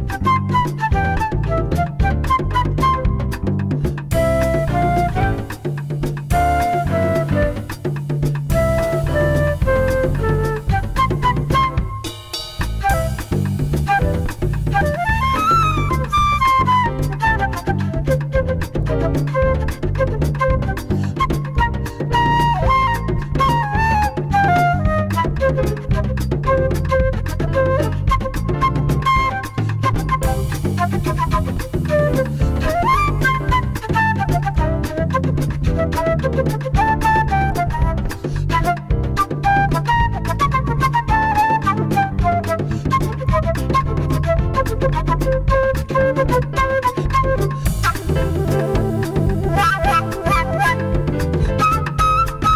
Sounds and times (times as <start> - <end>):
Flute: 0.0 - 52.5.